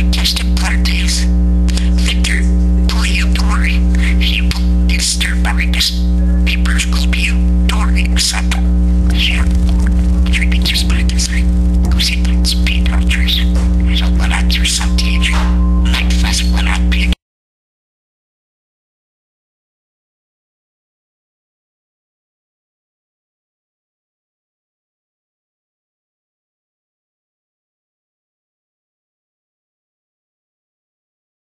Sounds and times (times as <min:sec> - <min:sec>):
Speech: 0:00.0 - 0:17.2.